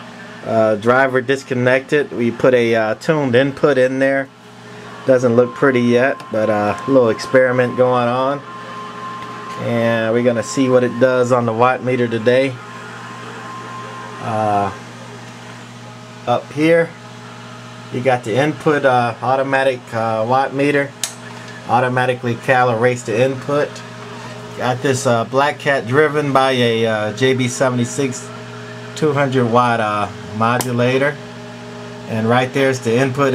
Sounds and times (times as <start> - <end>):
Speech: 0.4 - 4.3, 5.1 - 8.5, 9.6 - 12.6, 14.2 - 14.8, 16.2 - 17.0, 17.9 - 21.0, 21.7 - 23.8, 24.6 - 28.3, 29.0 - 31.2, 32.1 - 33.3.